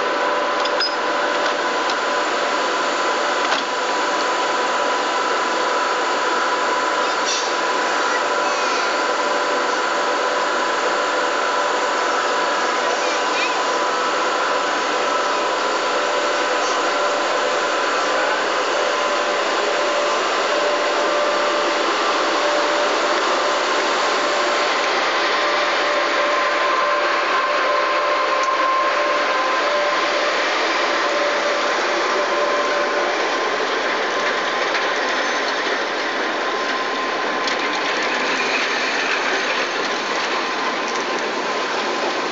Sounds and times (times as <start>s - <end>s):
Railroad car, train wagon: 0.0s - 42.3s
Train: 0.0s - 42.3s.